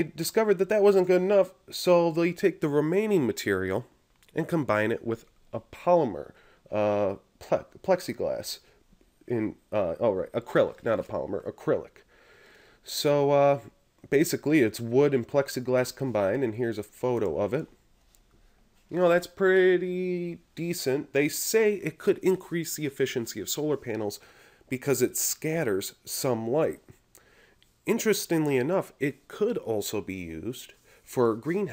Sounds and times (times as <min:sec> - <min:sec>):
Speech: 0:00.0 - 0:12.0, 0:12.8 - 0:17.8, 0:18.9 - 0:27.0, 0:27.8 - 0:31.7.